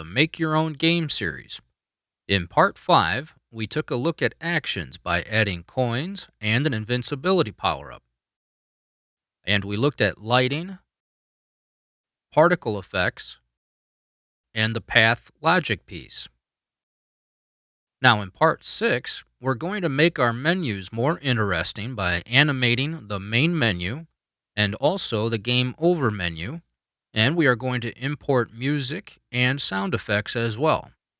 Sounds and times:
Speech: 0:00.0 - 0:01.7, 0:02.3 - 0:08.1, 0:09.4 - 0:10.9, 0:12.4 - 0:13.5, 0:14.6 - 0:16.4, 0:18.0 - 0:31.0.

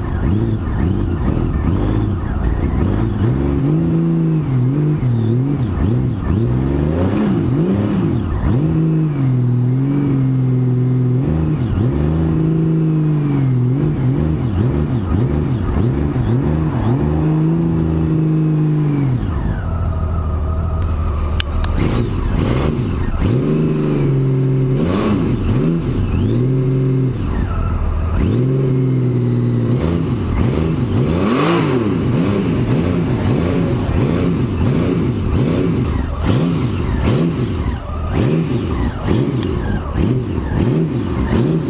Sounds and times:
Accelerating, revving, vroom: 0:00.0 - 0:19.7, 0:21.6 - 0:41.7
Motorcycle: 0:00.0 - 0:41.7.

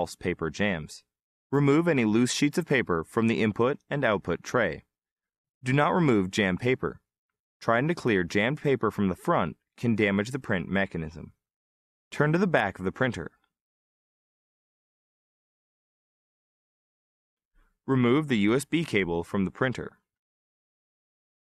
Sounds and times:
Speech: 0:00.0 - 0:04.9, 0:05.6 - 0:11.4, 0:12.1 - 0:13.4, 0:17.9 - 0:20.1.

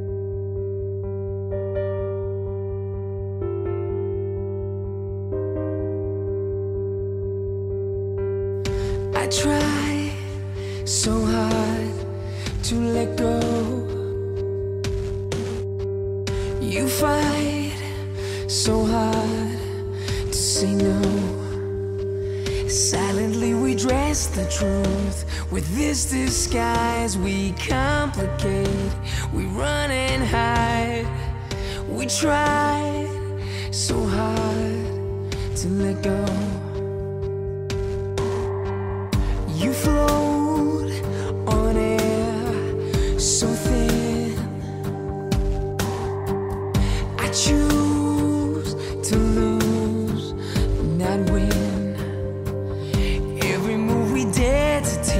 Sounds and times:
Music: 0:00.0 - 0:55.1.

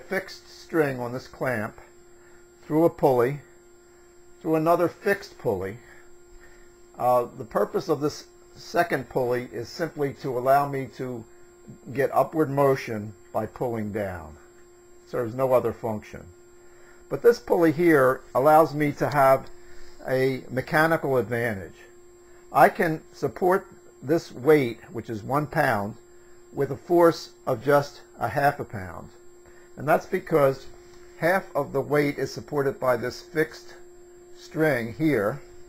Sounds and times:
Speech: 0:00.0 - 0:01.9, 0:02.6 - 0:03.5, 0:04.4 - 0:06.0, 0:07.0 - 0:14.4, 0:15.1 - 0:16.3, 0:17.1 - 0:26.0, 0:26.6 - 0:29.2, 0:29.8 - 0:33.8, 0:34.4 - 0:35.5.

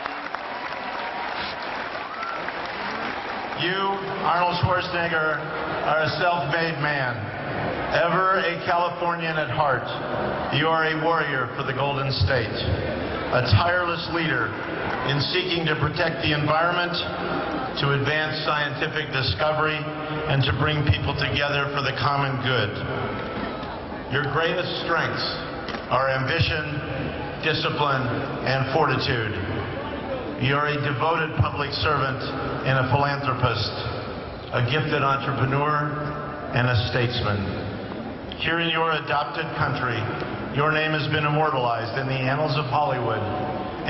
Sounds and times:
Narration, monologue: 0:03.5 - 0:23.3, 0:23.9 - 0:43.8
Male speech, man speaking: 0:03.6 - 0:07.2, 0:07.9 - 0:12.7, 0:13.3 - 0:14.5, 0:15.1 - 0:17.1, 0:17.8 - 0:22.8, 0:24.1 - 0:29.4, 0:30.4 - 0:33.9, 0:34.6 - 0:37.5, 0:38.4 - 0:43.8.

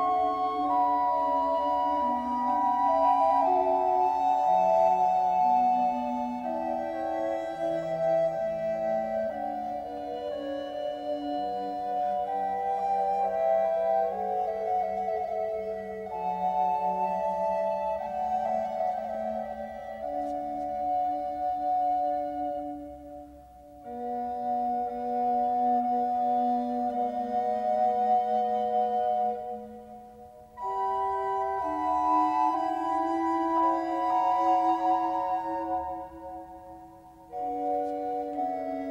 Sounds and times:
Music: 0:00.0 - 0:38.9.

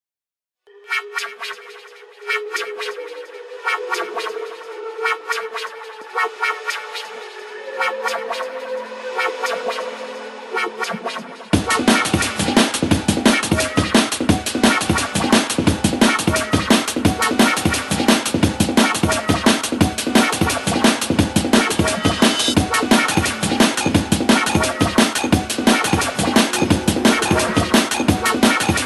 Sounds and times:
Electronic music: 0:00.7 - 0:28.8.

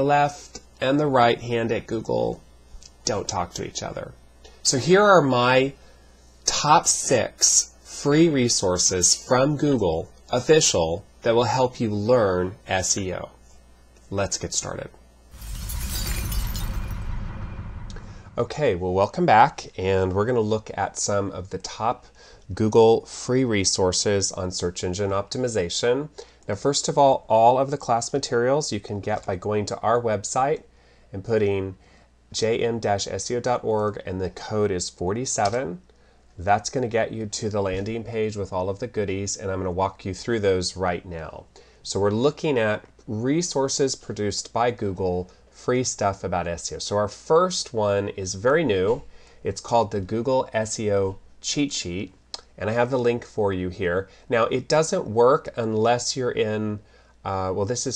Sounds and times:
Speech: 0:00.0 - 0:05.8, 0:06.4 - 0:13.4, 0:14.0 - 0:15.0, 0:18.4 - 0:57.9.

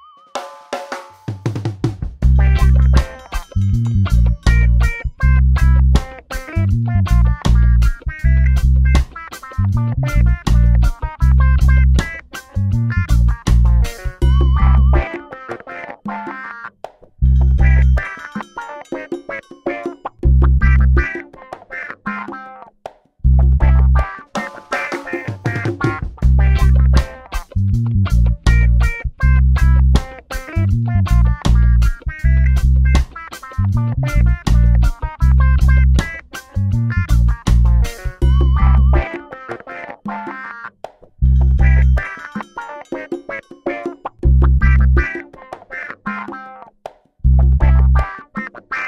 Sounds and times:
Music: 0:00.0 - 0:48.8.

